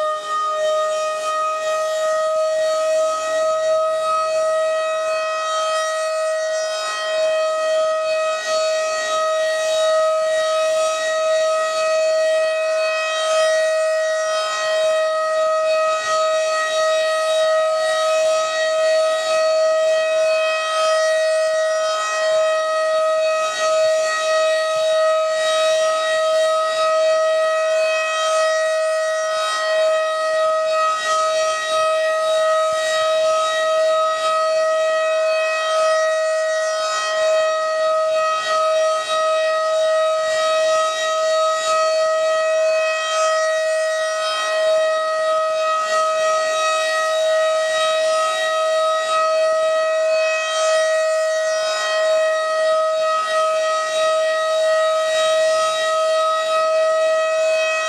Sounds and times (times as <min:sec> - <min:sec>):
Siren: 0:00.0 - 0:57.8.